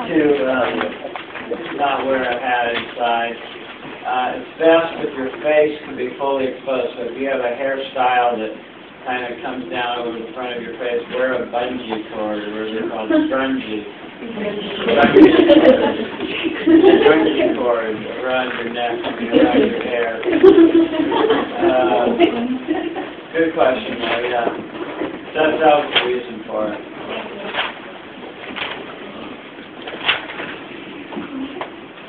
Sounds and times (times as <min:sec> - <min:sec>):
Male speech, man speaking: 0:00.0 - 0:13.9, 0:14.7 - 0:15.8, 0:16.9 - 0:20.3, 0:21.6 - 0:22.3, 0:23.4 - 0:24.6, 0:25.4 - 0:26.9.